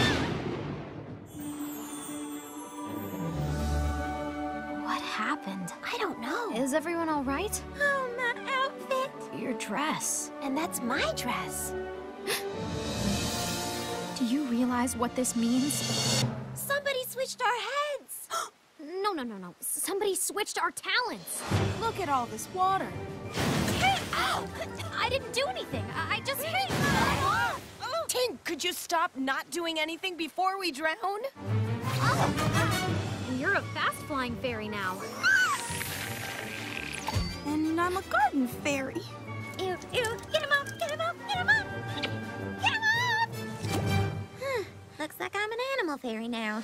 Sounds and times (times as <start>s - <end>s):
Music: 0.0s - 17.4s, 21.2s - 27.4s, 31.3s - 46.2s.